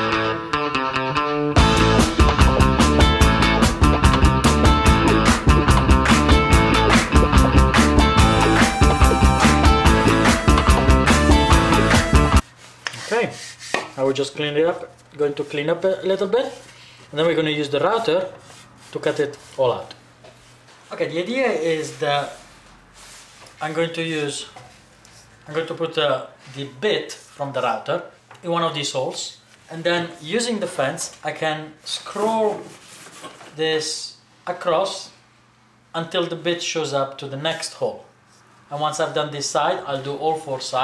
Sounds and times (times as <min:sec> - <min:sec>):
Speech: 0:13.0 - 0:13.4, 0:14.0 - 0:20.0, 0:20.9 - 0:22.4, 0:23.6 - 0:24.6, 0:25.4 - 0:32.7, 0:33.5 - 0:35.2, 0:35.9 - 0:38.1, 0:38.7 - 0:40.8.